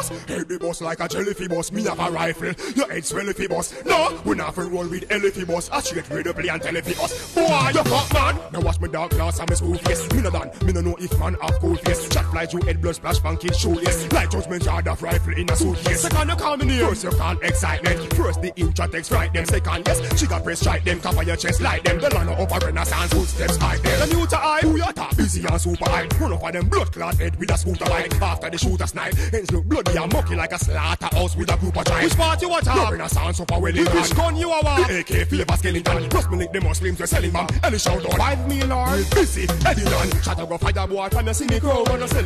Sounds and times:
Music: 0.0s - 42.2s.

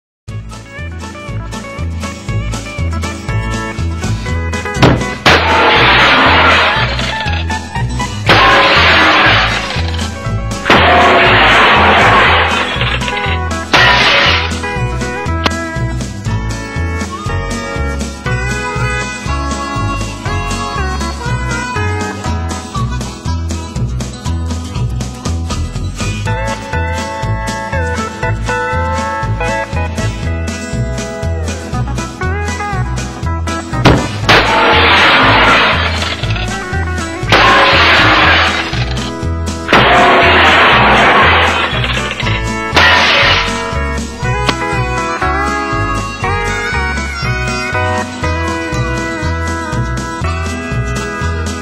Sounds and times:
Music: 0.3s - 51.6s.

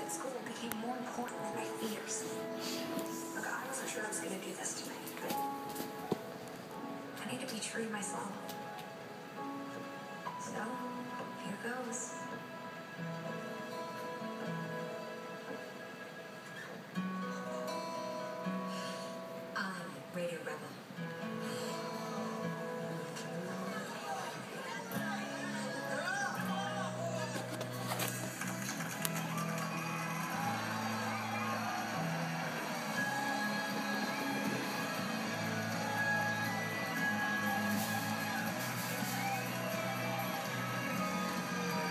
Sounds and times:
Music: 0.0s - 41.9s.

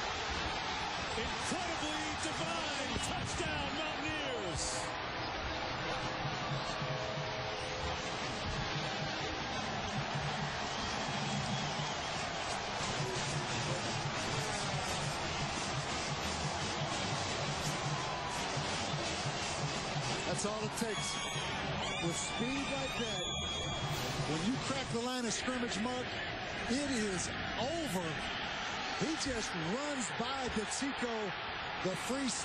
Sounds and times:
Speech: 1.2s - 4.9s, 20.3s - 21.2s, 22.0s - 23.3s, 24.2s - 26.1s, 26.7s - 28.2s, 29.0s - 32.4s.

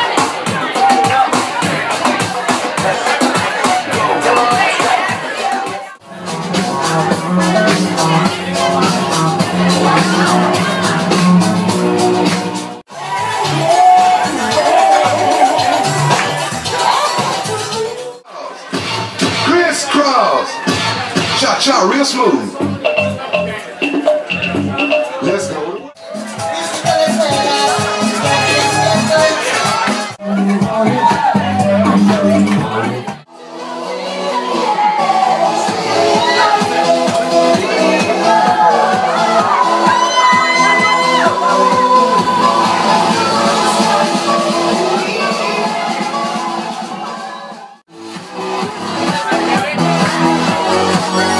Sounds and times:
Music: 0.0s - 51.4s
Speech: 19.4s - 24.0s, 24.7s - 26.0s, 48.8s - 51.4s.

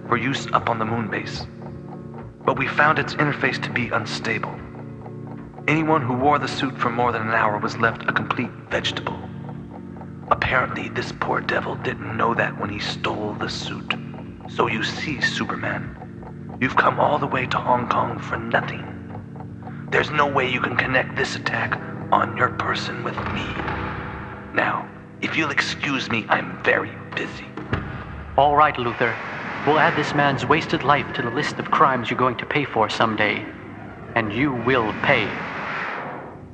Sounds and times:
Speech: 0.0s - 1.5s, 2.5s - 4.6s, 5.7s - 9.3s, 10.3s - 16.0s, 16.6s - 19.0s, 19.9s - 23.7s, 24.5s - 27.6s, 28.4s - 33.6s, 34.2s - 35.4s
Music: 0.0s - 36.5s.

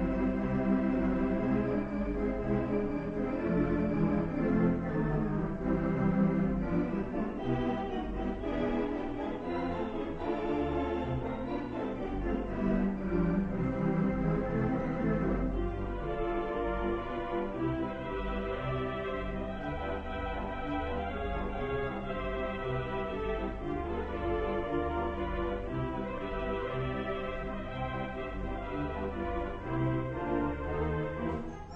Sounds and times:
Classical music: 0.0s - 31.7s
Keyboard (musical): 0.0s - 31.7s.

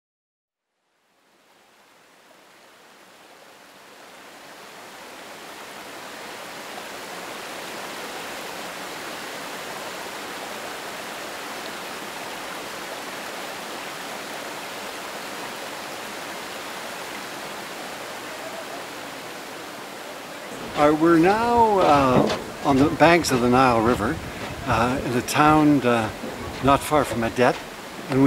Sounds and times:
Pink noise: 1.2s - 28.2s.

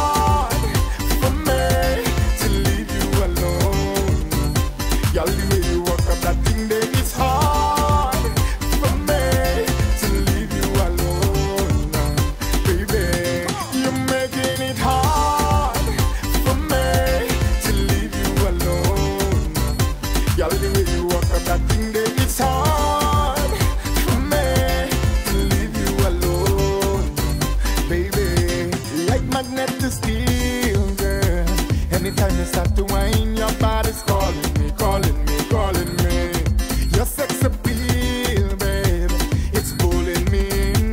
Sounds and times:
Independent music: 0.0s - 40.9s.

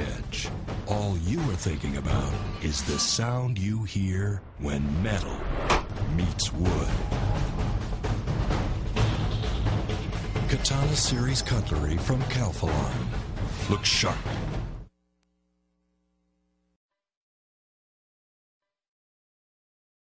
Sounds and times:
Speech: 0.0s - 5.4s, 6.1s - 7.1s, 10.5s - 14.3s
Music: 0.0s - 14.9s.

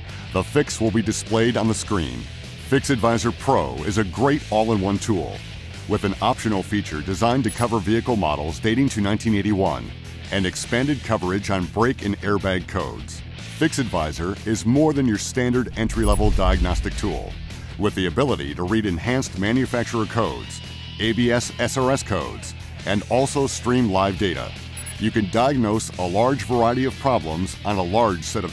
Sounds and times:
Music: 0.0s - 28.5s
Speech: 0.3s - 28.5s.

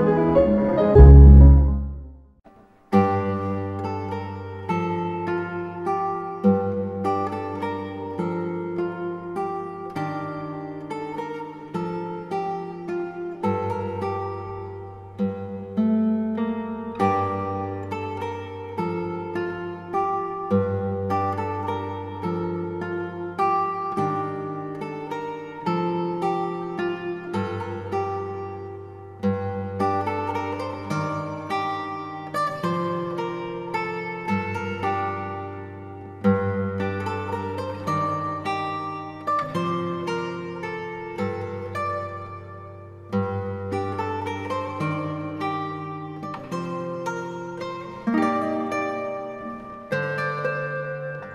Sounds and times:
Music: 0.0s - 51.3s.

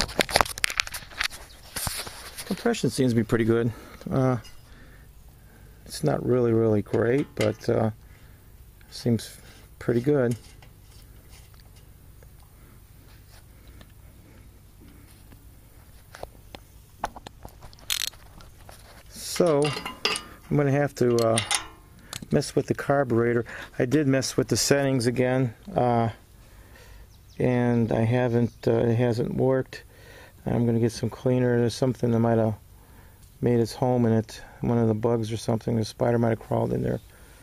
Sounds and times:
Outside, rural or natural: 0.0s - 37.4s
Speech: 2.5s - 4.5s, 5.9s - 8.0s, 8.9s - 10.4s, 19.1s - 19.8s, 20.5s - 21.5s, 22.3s - 26.2s, 27.4s - 32.6s, 33.4s - 37.0s.

